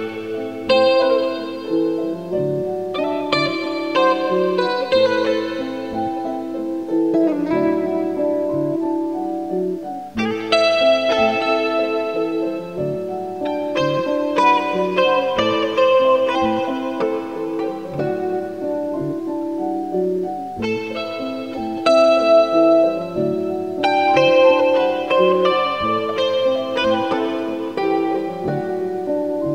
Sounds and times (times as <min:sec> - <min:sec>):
Music: 0:00.0 - 0:29.5.